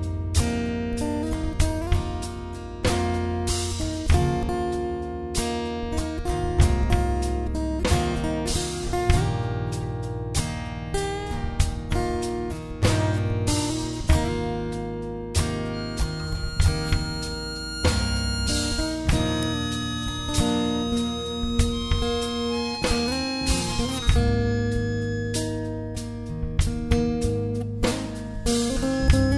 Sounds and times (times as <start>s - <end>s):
Steel guitar, slide guitar: 0.0s - 29.3s.